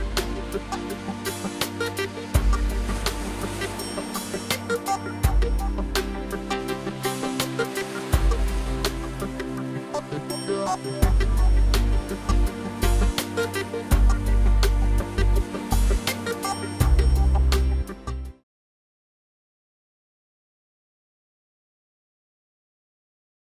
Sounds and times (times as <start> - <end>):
Music: 0.0 - 18.5.